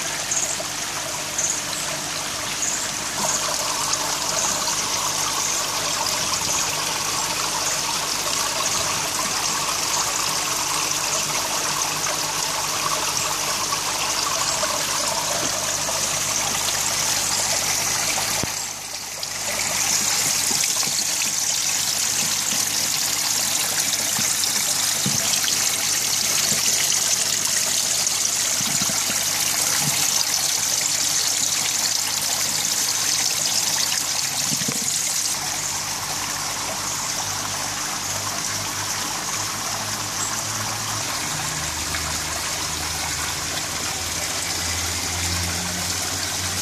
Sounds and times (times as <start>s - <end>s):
Trickle, dribble: 0.0s - 46.6s.